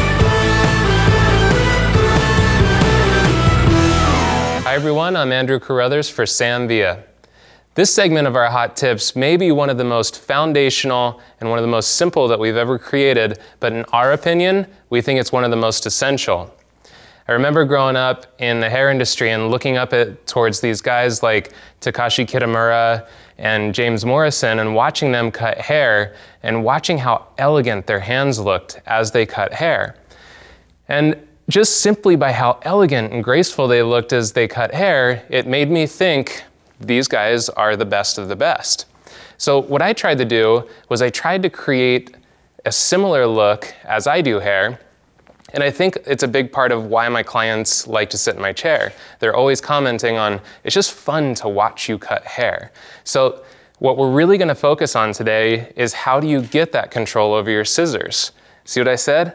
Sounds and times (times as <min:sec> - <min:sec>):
Speech: 0:04.6 - 0:07.2, 0:07.8 - 0:16.6, 0:17.3 - 0:30.0, 0:30.8 - 0:44.9, 0:45.5 - 0:59.3.